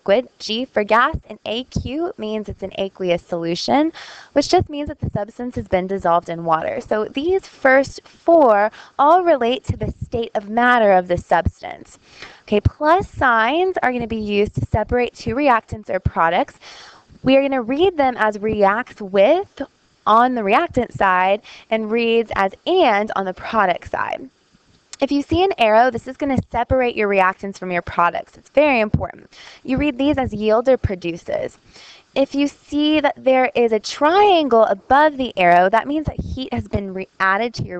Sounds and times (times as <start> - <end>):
Speech: 0.0 - 16.6, 17.3 - 24.3, 25.0 - 37.7.